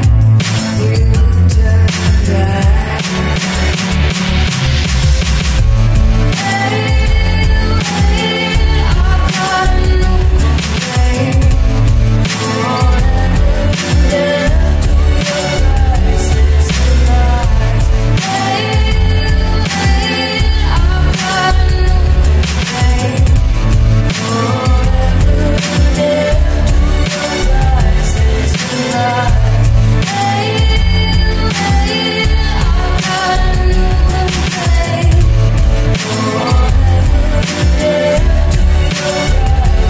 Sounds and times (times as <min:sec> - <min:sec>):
Grunge: 0:00.0 - 0:39.8
Pop music: 0:00.0 - 0:39.8.